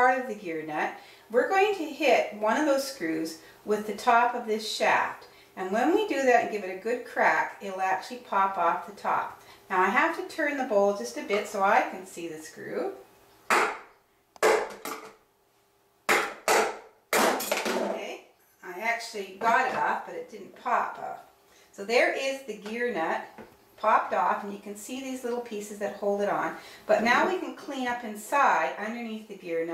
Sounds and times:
Speech: 0.0 - 13.0, 17.8 - 29.7
Inside, small room: 0.0 - 29.7.

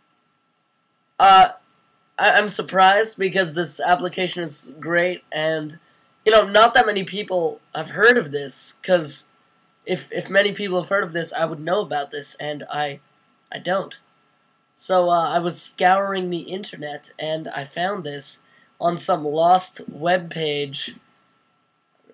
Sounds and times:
Speech: 1.2 - 1.6, 2.2 - 14.0, 14.8 - 21.0.

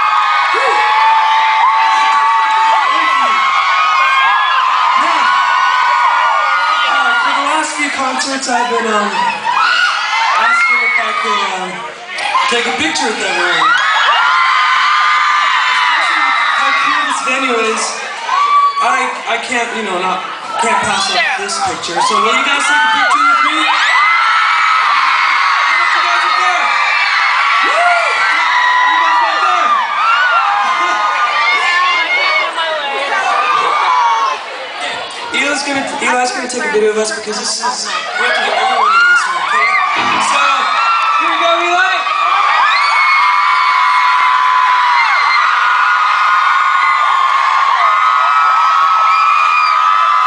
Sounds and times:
Inside, public space: 0.0 - 50.2
Speech: 6.9 - 9.4, 10.4 - 13.7, 18.8 - 23.8, 35.2 - 42.1.

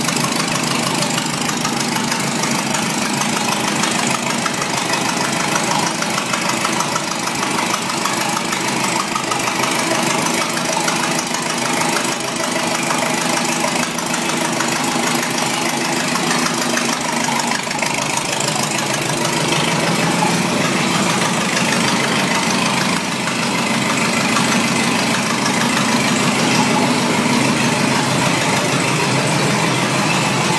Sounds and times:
Car: 0.0 - 30.5
Idling: 0.0 - 30.5.

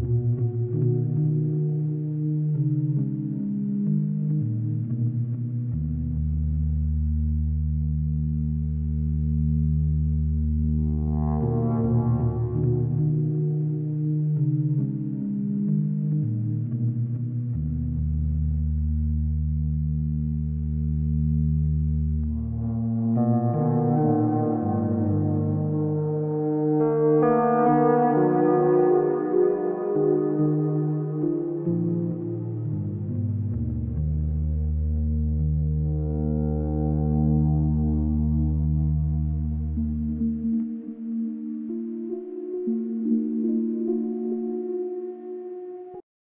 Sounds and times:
Ambient music: 0.0 - 46.0.

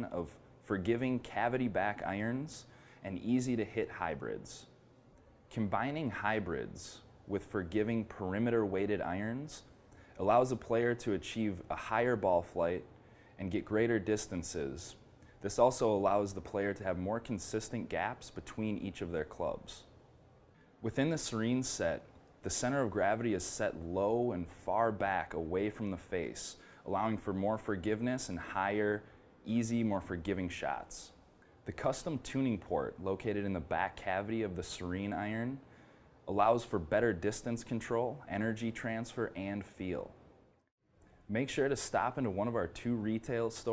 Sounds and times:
Speech: 0.0 - 4.8, 5.5 - 19.9, 20.8 - 35.7, 36.3 - 40.2, 41.3 - 43.7.

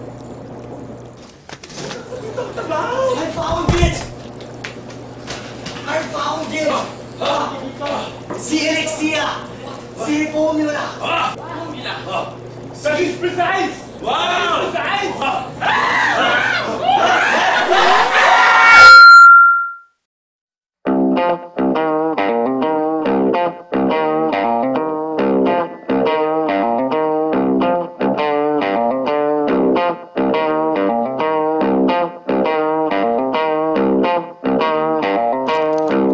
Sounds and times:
Speech: 2.6 - 4.1, 5.8 - 15.5.

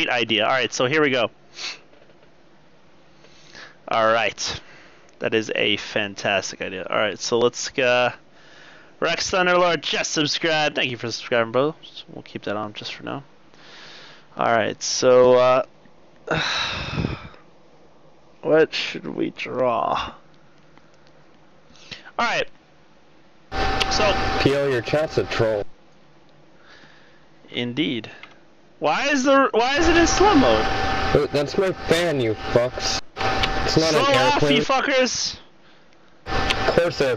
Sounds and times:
Speech: 0.0 - 1.3, 3.9 - 4.6, 5.2 - 8.2, 9.0 - 13.3, 14.4 - 15.7, 18.4 - 20.2, 22.2 - 22.5, 23.9 - 25.7, 27.5 - 28.2, 28.8 - 33.0, 33.6 - 35.5, 36.7 - 37.1.

